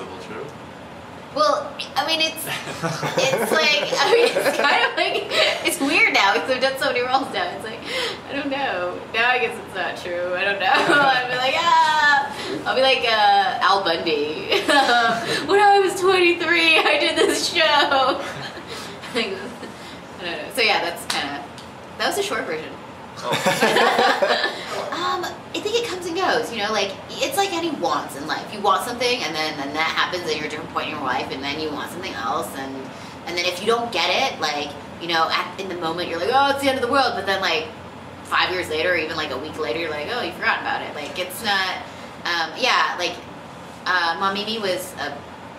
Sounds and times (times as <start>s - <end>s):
Female speech, woman speaking: 1.4s - 18.3s, 19.1s - 19.6s, 20.2s - 22.8s, 24.8s - 37.7s, 38.3s - 45.2s.